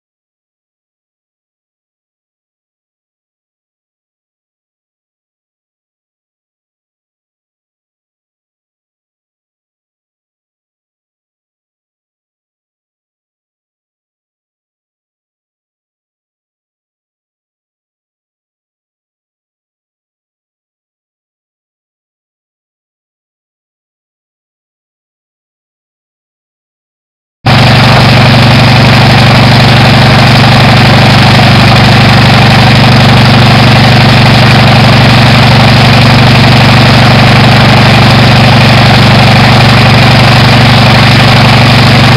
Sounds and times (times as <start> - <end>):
Idling: 27.5 - 42.1.